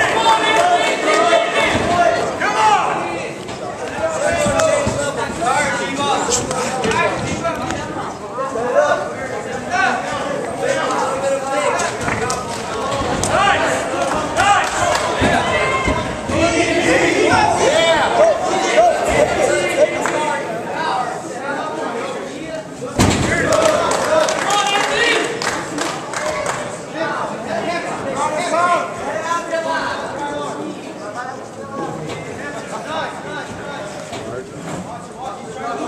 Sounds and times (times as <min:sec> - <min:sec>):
Inside, public space: 0:00.0 - 0:35.8
Speech: 0:00.0 - 0:35.8.